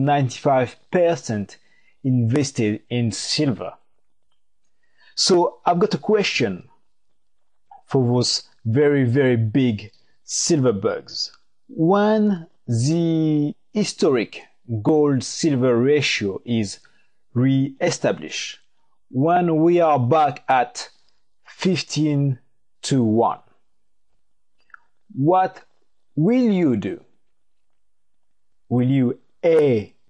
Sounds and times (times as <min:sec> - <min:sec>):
Speech: 0:00.0 - 0:03.8, 0:05.1 - 0:06.7, 0:07.8 - 0:16.8, 0:17.4 - 0:23.6, 0:25.1 - 0:27.2, 0:28.7 - 0:30.0.